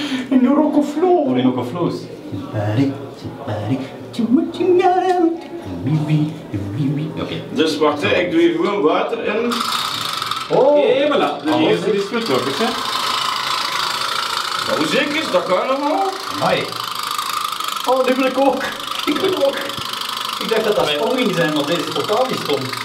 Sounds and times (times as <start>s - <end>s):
Speech: 10.5s - 12.8s, 20.4s - 22.8s.